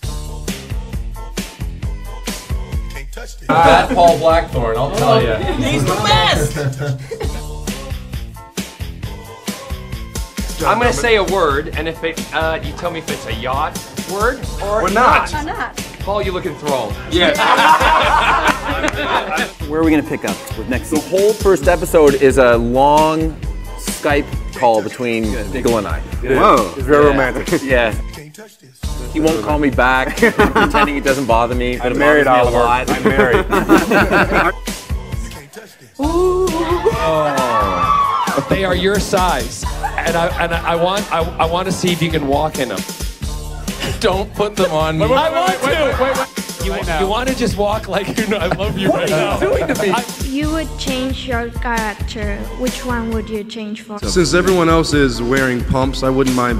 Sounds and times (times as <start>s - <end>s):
Music: 0.0s - 56.5s
Speech: 3.5s - 6.6s, 30.8s - 33.5s, 44.0s - 52.0s, 52.6s - 56.5s.